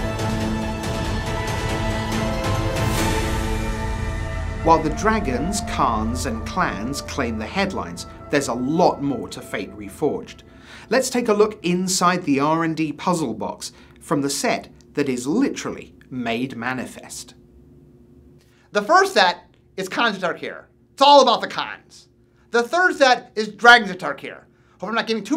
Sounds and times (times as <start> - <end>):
Speech: 4.7 - 17.4, 18.8 - 25.3.